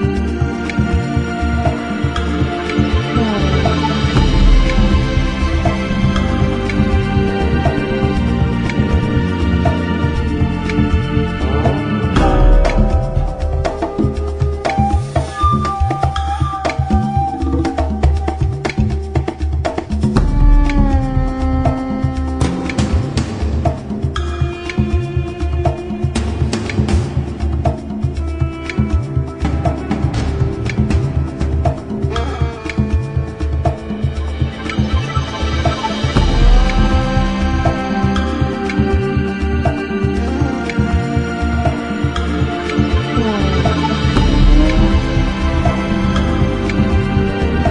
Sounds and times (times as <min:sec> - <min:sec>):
Scary music: 0:00.0 - 0:18.7, 0:20.1 - 0:47.7.